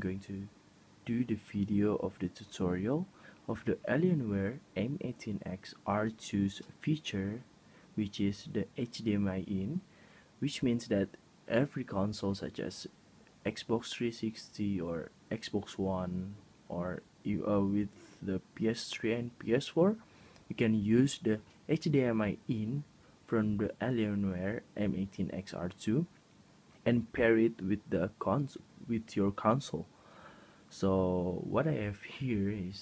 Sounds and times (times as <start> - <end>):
Speech: 0.0 - 26.2, 26.8 - 29.9, 30.7 - 32.8.